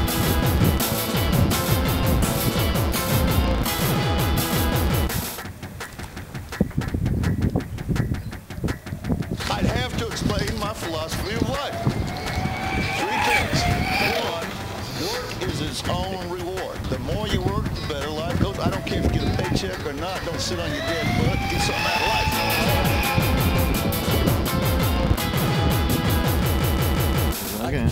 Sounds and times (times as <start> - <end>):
Music: 0.0 - 27.9
Speech: 13.0 - 14.6, 15.4 - 22.4, 27.6 - 27.9.